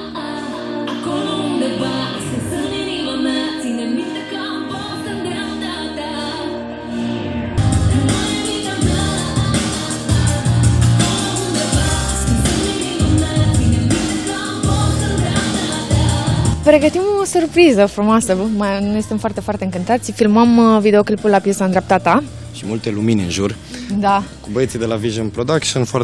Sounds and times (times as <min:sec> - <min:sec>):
Soundtrack music: 0:00.0 - 0:26.0
Speech: 0:16.7 - 0:26.0.